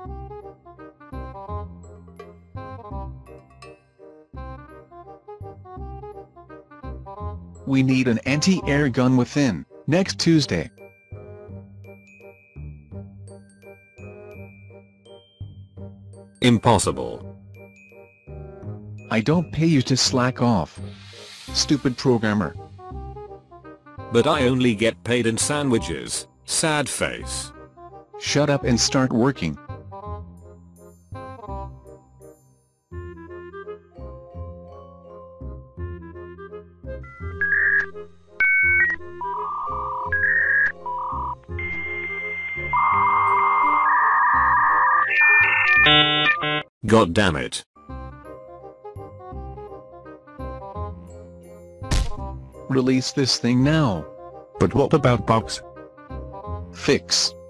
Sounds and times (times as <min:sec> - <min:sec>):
Music: 0:00.0 - 0:57.5
Speech: 0:07.7 - 0:10.7, 0:16.4 - 0:17.2, 0:19.1 - 0:20.8, 0:21.6 - 0:22.6, 0:24.1 - 0:27.5, 0:28.2 - 0:29.6, 0:46.8 - 0:47.7, 0:52.7 - 0:55.6, 0:56.8 - 0:57.4
Beep, bleep: 0:41.6 - 0:46.6.